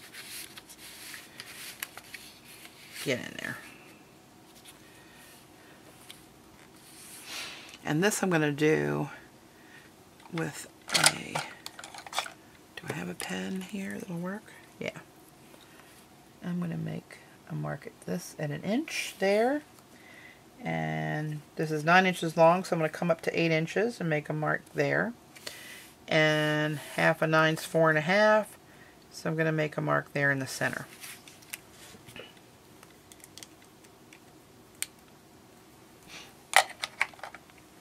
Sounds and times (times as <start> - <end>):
Inside, small room: 0.0 - 37.8
Speech: 3.0 - 3.7, 7.8 - 9.2, 12.8 - 15.1, 16.4 - 19.7, 20.6 - 25.2, 26.1 - 30.9.